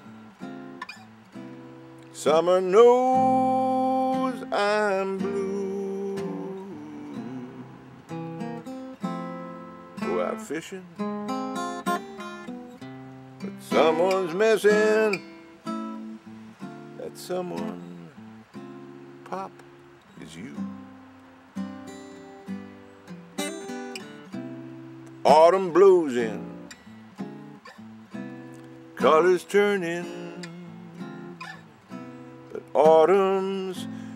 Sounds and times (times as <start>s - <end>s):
Music: 0.0s - 34.1s.